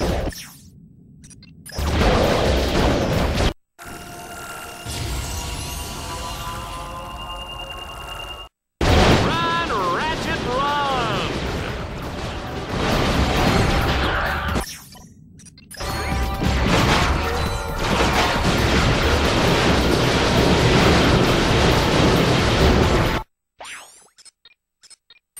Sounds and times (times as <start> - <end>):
Speech: 9.2 - 11.4.